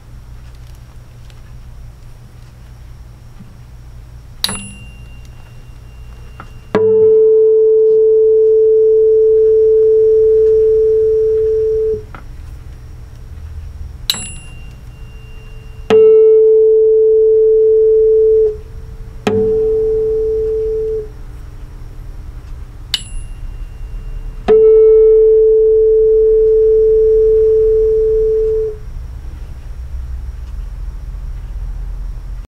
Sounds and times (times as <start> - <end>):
Tuning fork: 4.4 - 12.1, 14.1 - 21.2, 22.9 - 28.9.